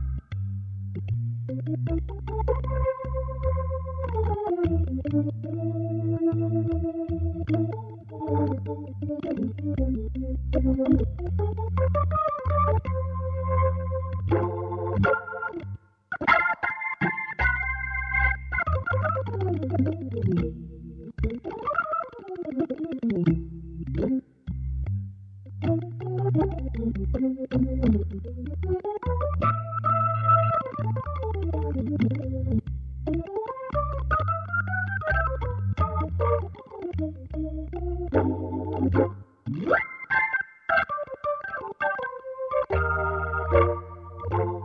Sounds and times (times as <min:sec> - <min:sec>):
Synthesizer: 0:00.0 - 0:24.6, 0:25.5 - 0:44.6.